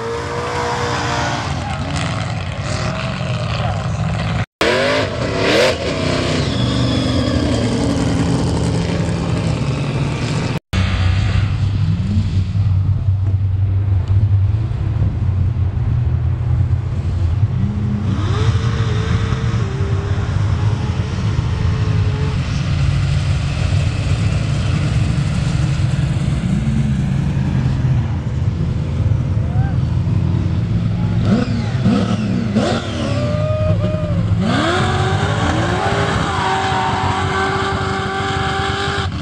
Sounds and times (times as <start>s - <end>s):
Outside, rural or natural: 0.0s - 39.2s
Race car, auto racing: 0.0s - 39.2s.